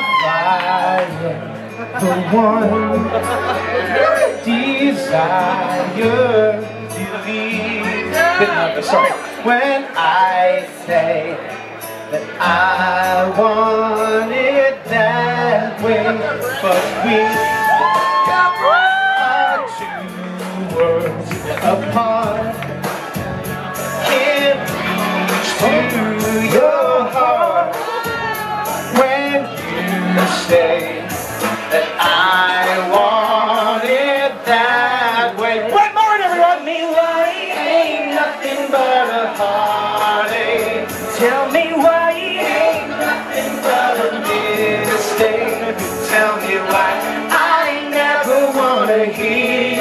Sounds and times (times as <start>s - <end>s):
Male singing: 0.0s - 22.7s, 23.9s - 49.8s
Music: 0.0s - 49.8s.